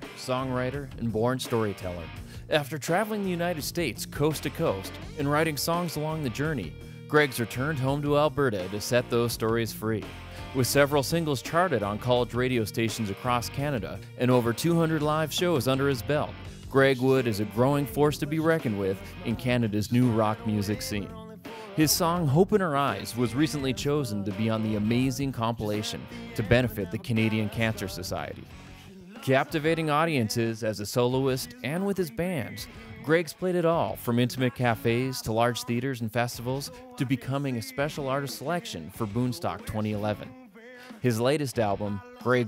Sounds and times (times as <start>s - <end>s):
Speech: 0.0s - 21.2s, 21.8s - 28.5s, 29.1s - 42.4s
Music: 0.0s - 42.4s.